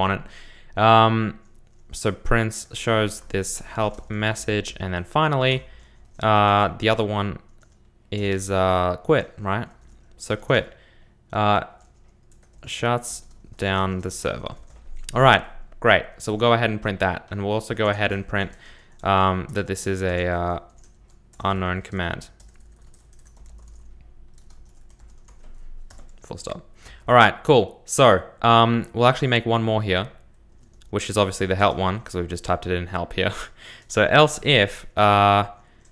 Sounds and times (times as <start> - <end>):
Typing: 7.5 - 7.8, 11.8 - 14.9, 22.4 - 26.2.